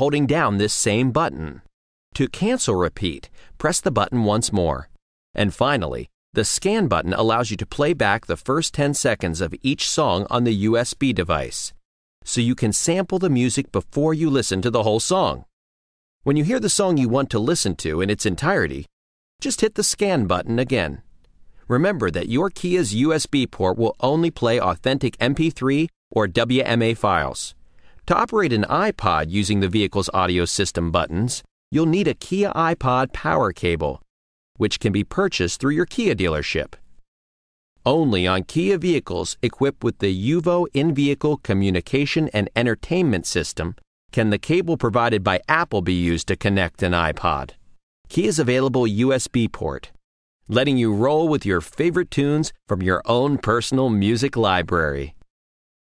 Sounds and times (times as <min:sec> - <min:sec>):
Speech: 0:00.0 - 0:15.5, 0:16.2 - 0:21.1, 0:21.7 - 0:36.8, 0:37.8 - 0:55.2.